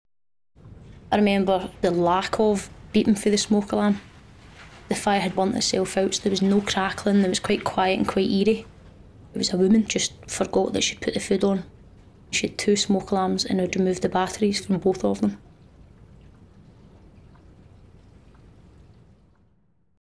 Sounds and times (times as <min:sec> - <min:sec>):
Speech: 0:01.1 - 0:04.1, 0:04.9 - 0:08.7, 0:09.3 - 0:11.7, 0:12.3 - 0:15.4.